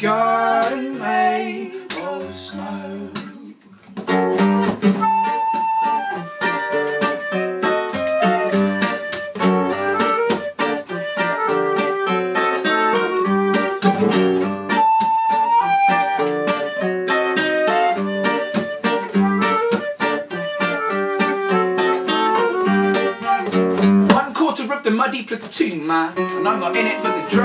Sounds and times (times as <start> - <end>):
Mandolin: 4.0 - 24.2, 26.2 - 27.4.